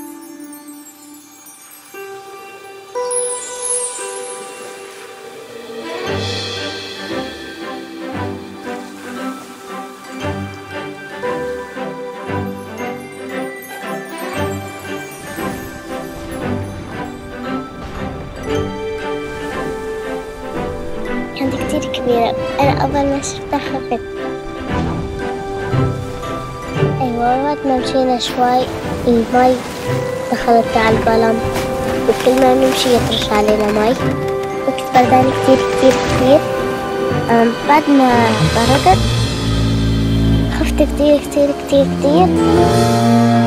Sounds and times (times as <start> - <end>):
Waves, surf: 1.2 - 43.4.